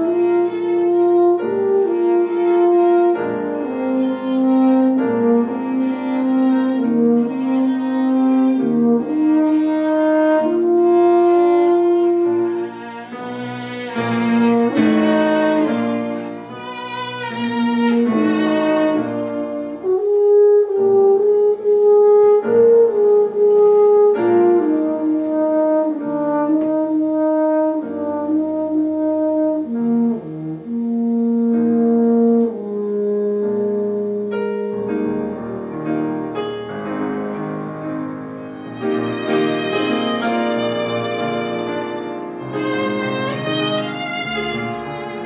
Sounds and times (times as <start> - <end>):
Violin, fiddle: 0.0 - 19.7, 38.5 - 45.2.